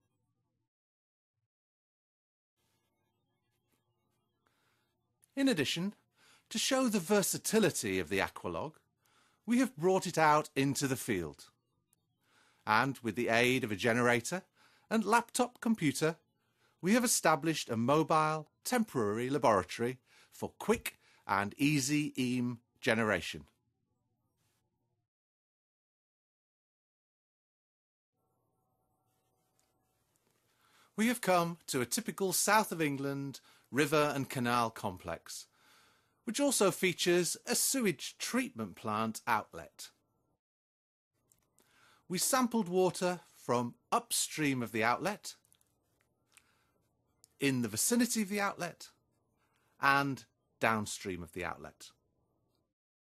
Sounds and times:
Speech: 5.4 - 8.8, 9.5 - 11.6, 12.7 - 16.2, 16.8 - 23.6, 31.0 - 35.5, 36.3 - 40.0, 42.1 - 45.5, 47.4 - 49.0, 49.8 - 52.0.

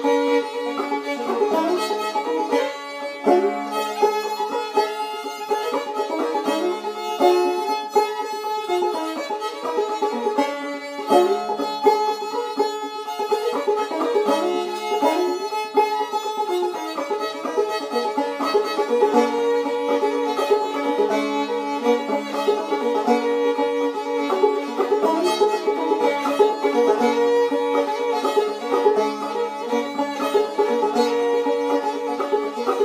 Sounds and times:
Violin, fiddle: 0.0 - 32.8.

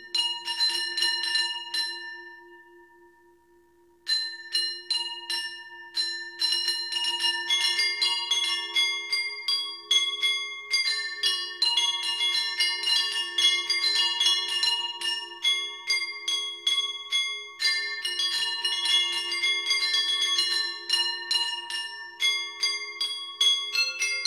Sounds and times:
Percussion: 0.0 - 24.2.

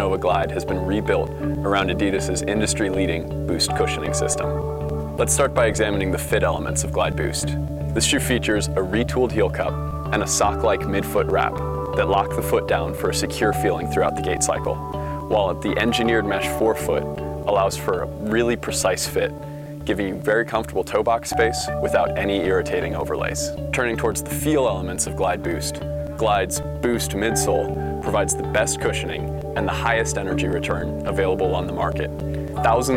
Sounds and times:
Speech: 0.0 - 4.5, 5.2 - 32.9
Music: 0.0 - 32.9.

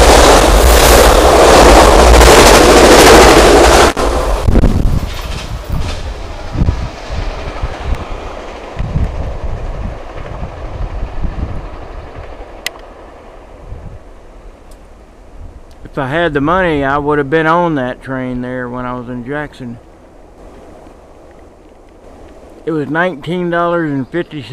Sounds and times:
Train: 0.0 - 24.5.

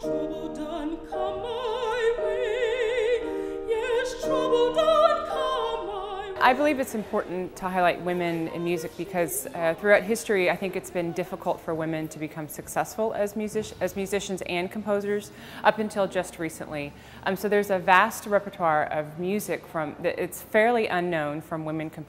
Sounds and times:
Speech: 6.4 - 22.0.

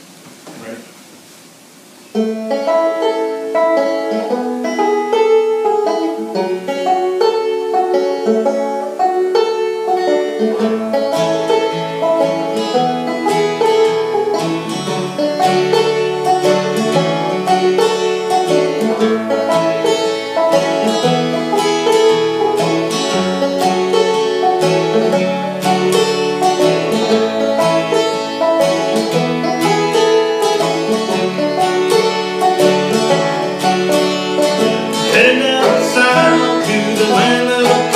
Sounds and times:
Bluegrass: 0.0 - 37.9
Guitar: 0.0 - 37.9
Banjo: 2.1 - 37.9.

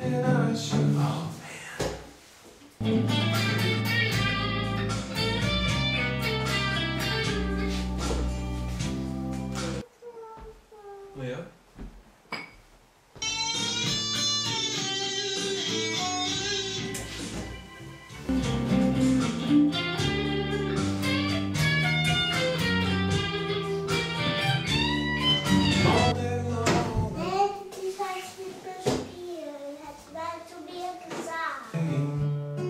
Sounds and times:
Acoustic guitar: 0.0 - 1.7, 2.8 - 10.4, 13.2 - 32.6
Electric guitar: 2.8 - 9.8, 18.3 - 26.2.

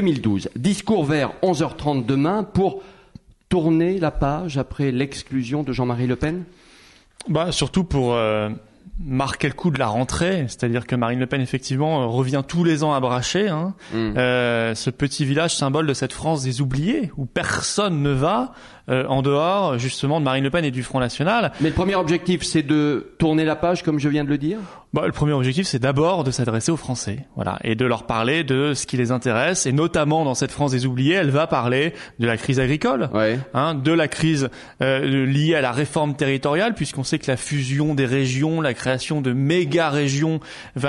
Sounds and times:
Speech: 0.0 - 2.8, 3.5 - 6.5, 7.2 - 40.8.

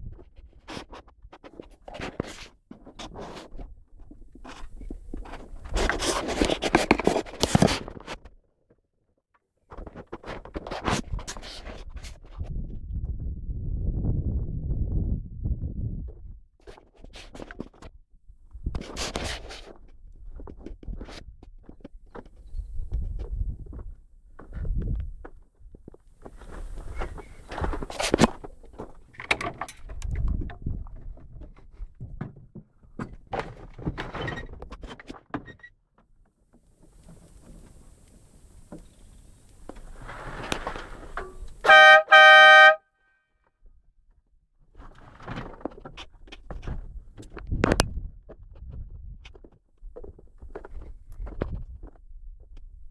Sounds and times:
Outside, urban or manmade: 0.0 - 52.9.

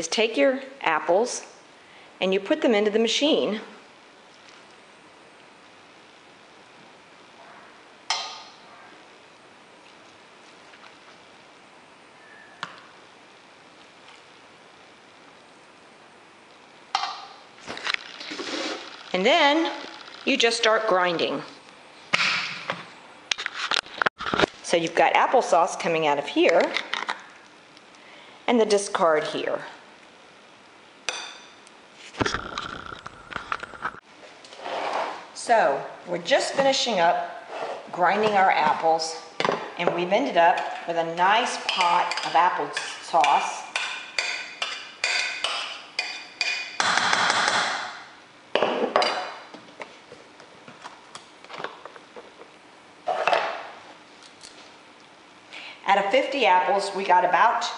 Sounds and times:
Speech: 0.0 - 1.5, 2.2 - 3.8, 19.2 - 21.6, 24.7 - 26.8, 28.5 - 29.8, 35.4 - 43.7, 55.8 - 57.7.

